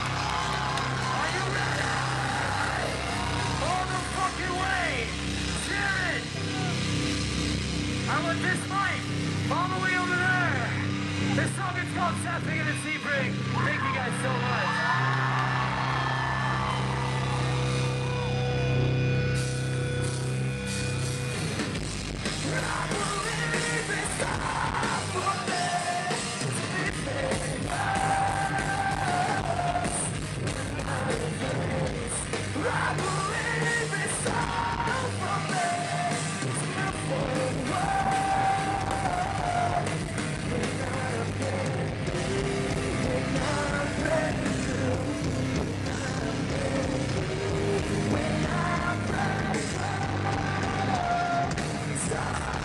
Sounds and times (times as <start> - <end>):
Music: 0.0 - 52.6.